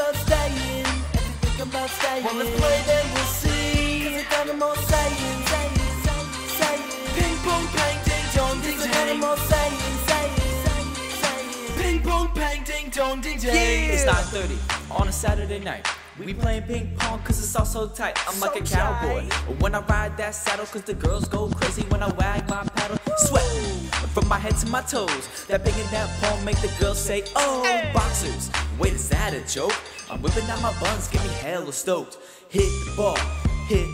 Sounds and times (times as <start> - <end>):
Music: 0.0 - 33.9.